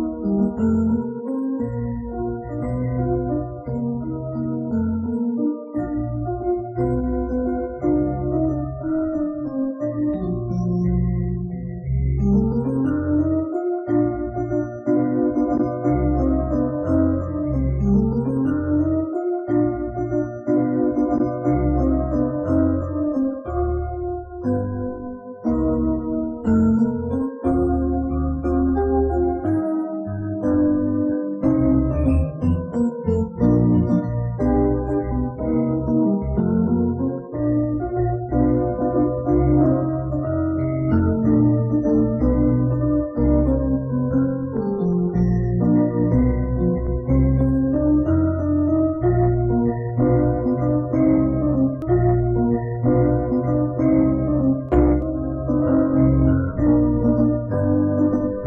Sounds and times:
Music: 0.0s - 58.4s.

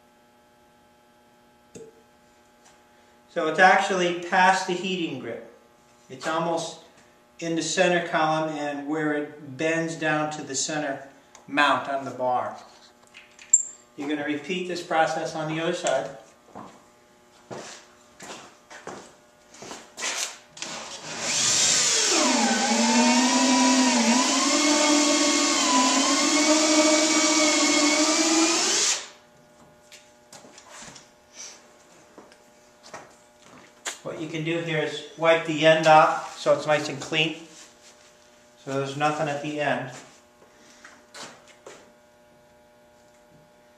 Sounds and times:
Speech: 3.3s - 12.7s, 14.0s - 16.2s, 34.0s - 37.5s, 38.6s - 40.1s
Drill: 20.2s - 29.2s.

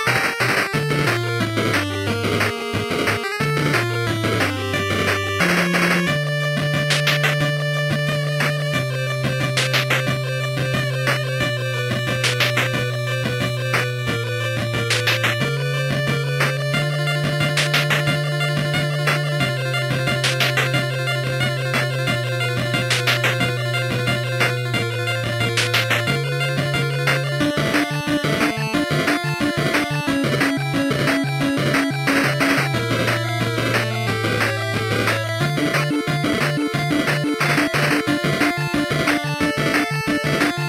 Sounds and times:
Soundtrack music: 0.0s - 40.6s
Video game music: 0.0s - 40.6s.

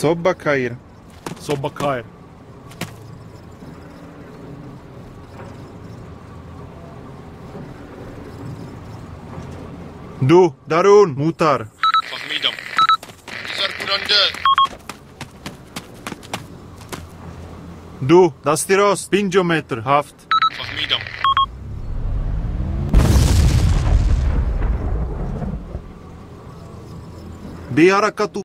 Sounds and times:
Car passing by: 21.5s - 23.1s.

